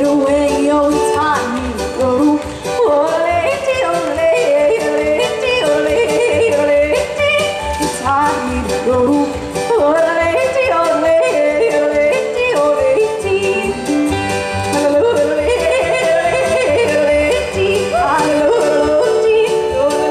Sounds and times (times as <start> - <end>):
Music: 0.0 - 20.1.